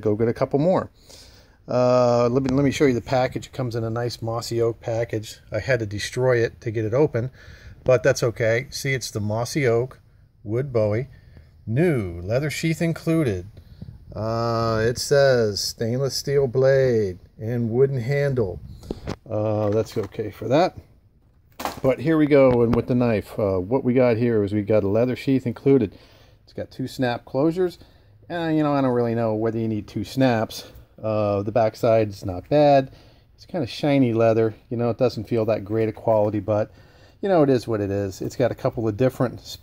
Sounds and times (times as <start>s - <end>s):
Speech: 0.0s - 0.9s, 1.7s - 18.6s, 19.2s - 20.9s, 21.8s - 39.6s.